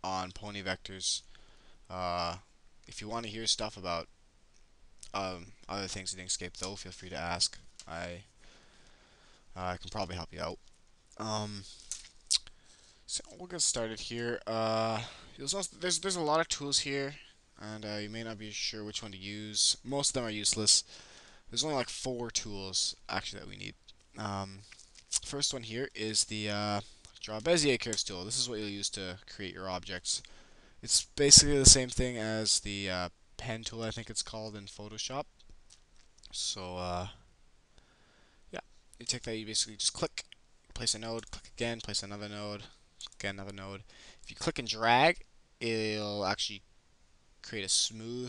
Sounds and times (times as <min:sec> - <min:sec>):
Speech: 0:00.0 - 0:01.3, 0:01.9 - 0:04.1, 0:05.0 - 0:08.3, 0:09.6 - 0:10.6, 0:11.2 - 0:11.7, 0:13.1 - 0:20.9, 0:21.5 - 0:35.3, 0:36.3 - 0:37.2, 0:38.6 - 0:46.6, 0:47.4 - 0:48.2.